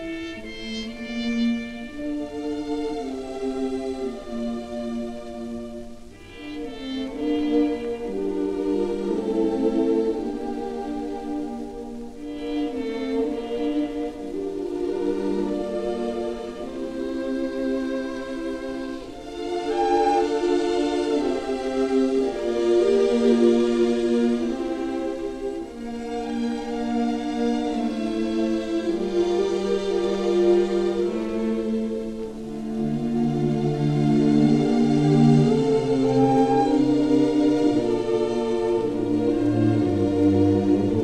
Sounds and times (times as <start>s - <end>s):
Ambient music: 0.0s - 41.0s.